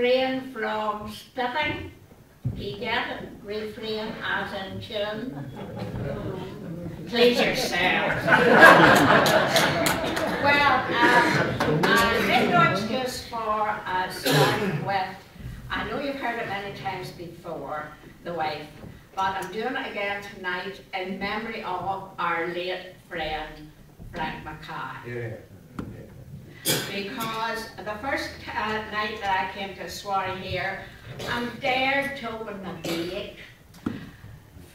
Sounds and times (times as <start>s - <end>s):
Speech: 0.0s - 8.3s, 10.3s - 23.6s
Crowd: 5.2s - 13.2s.